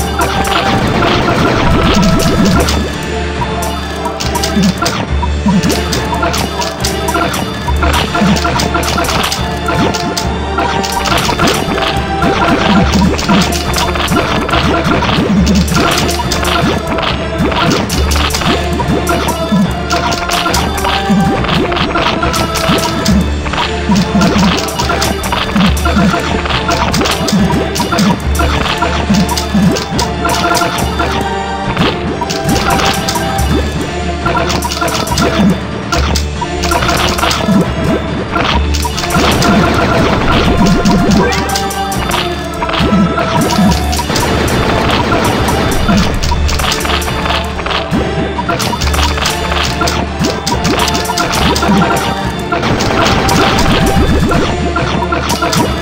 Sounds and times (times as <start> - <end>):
Music: 0.0 - 55.8.